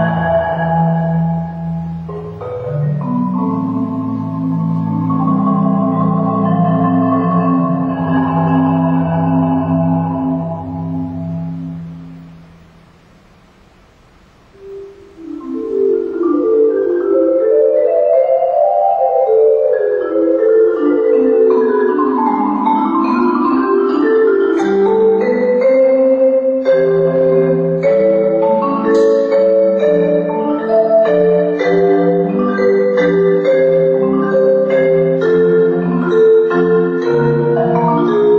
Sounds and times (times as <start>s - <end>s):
Vibraphone: 0.0s - 12.2s, 14.6s - 38.3s
Marimba, xylophone: 0.0s - 12.5s, 14.6s - 38.3s.